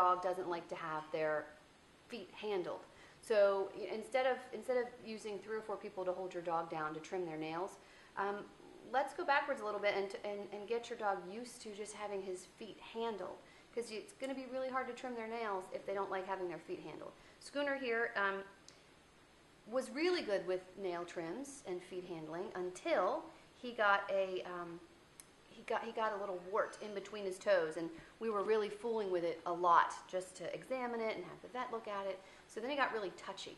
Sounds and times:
Speech: 0.0s - 18.6s, 19.7s - 24.9s, 25.5s - 33.5s.

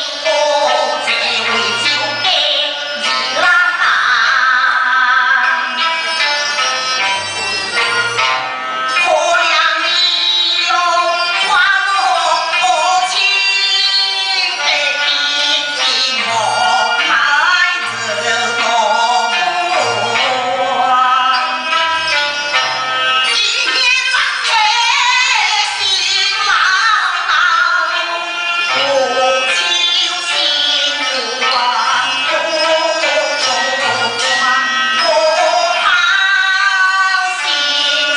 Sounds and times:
Music: 0.0s - 38.1s.

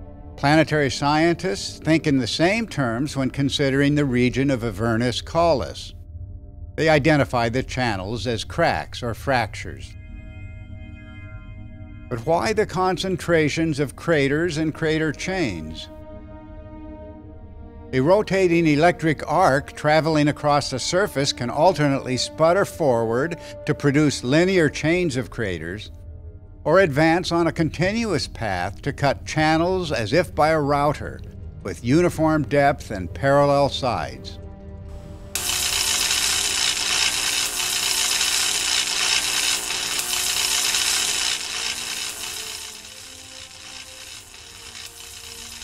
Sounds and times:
Speech: 0.4s - 6.0s, 6.8s - 9.9s, 12.1s - 15.9s, 18.0s - 25.9s, 26.7s - 34.4s.

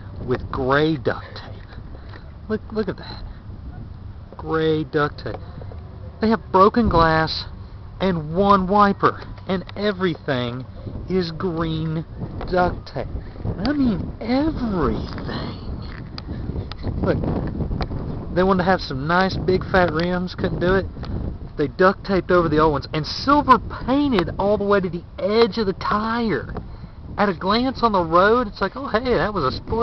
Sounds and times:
Speech: 0.2s - 1.7s, 2.5s - 3.2s, 4.4s - 5.4s, 6.2s - 15.7s, 18.4s - 20.9s, 21.6s - 26.5s, 27.2s - 29.8s.

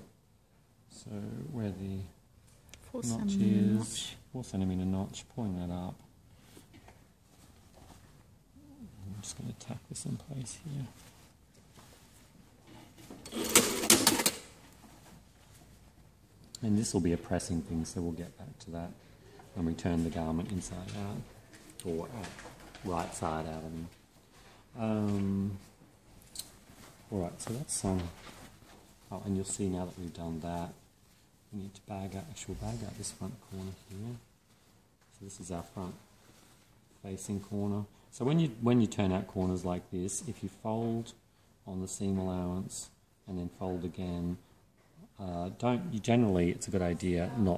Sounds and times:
Speech: 0.9s - 2.2s, 2.9s - 6.0s, 8.6s - 11.0s, 16.6s - 19.0s, 19.6s - 24.0s, 24.8s - 25.7s, 27.1s - 28.2s, 31.5s - 34.3s, 35.1s - 36.0s, 37.0s - 44.4s, 45.1s - 47.5s
Sewing machine: 13.3s - 14.5s.

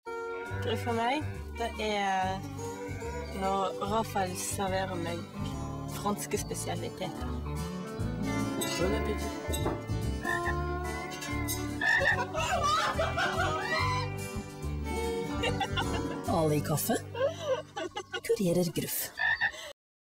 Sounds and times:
Croak: 10.2s - 10.6s, 11.8s - 12.2s, 19.0s - 19.6s.

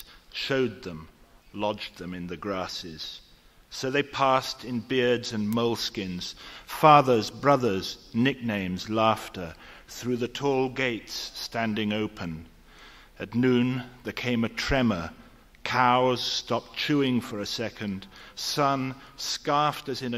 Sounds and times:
Speech: 0.0s - 12.5s, 13.2s - 20.1s.

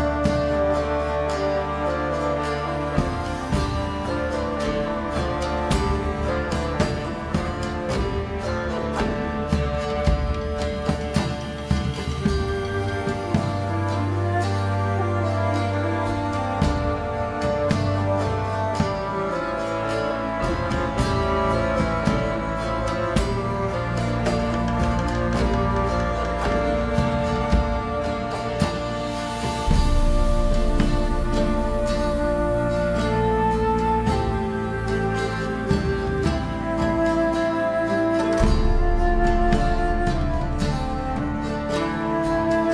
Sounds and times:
Music: 0.0s - 42.7s.

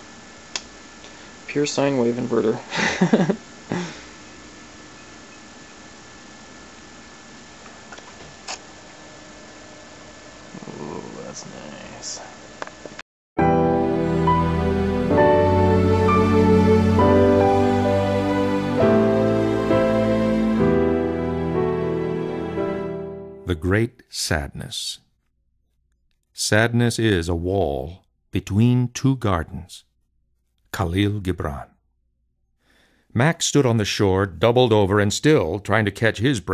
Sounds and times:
Music: 13.4s - 23.5s.

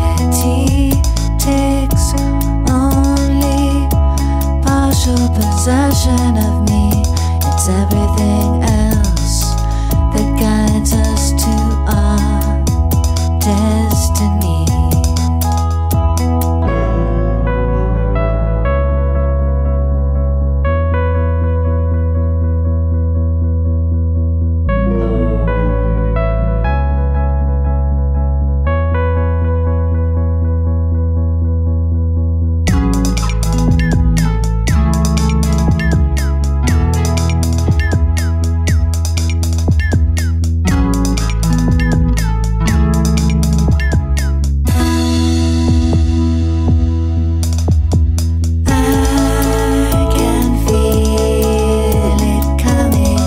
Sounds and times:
Electric piano: 0.0s - 53.2s.

